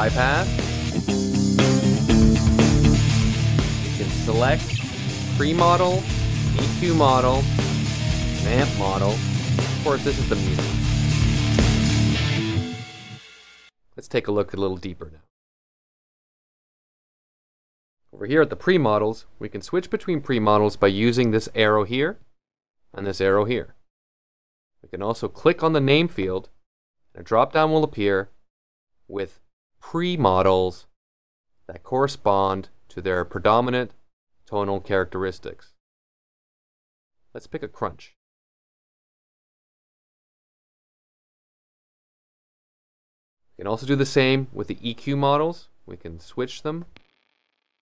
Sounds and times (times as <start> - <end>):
Speech: 0.0 - 0.5, 4.0 - 4.7, 5.4 - 7.5, 8.4 - 9.2, 9.8 - 10.6, 14.0 - 15.3, 18.2 - 22.2, 23.0 - 23.8, 24.9 - 26.5, 27.2 - 28.3, 29.1 - 30.9, 31.7 - 35.8, 37.4 - 38.2, 43.6 - 46.9
Music: 0.0 - 13.7.